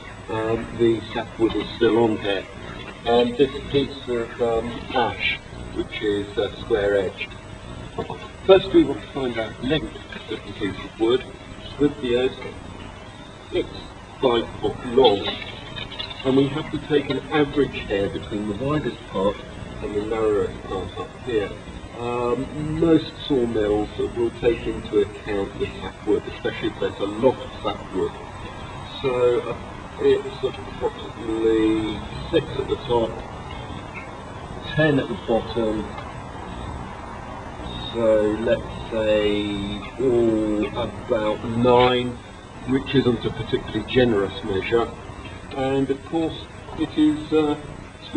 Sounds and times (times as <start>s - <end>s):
Speech: 0.3s - 7.3s, 8.0s - 12.6s, 13.5s - 28.2s, 28.8s - 33.3s, 34.6s - 36.0s, 37.7s - 48.1s.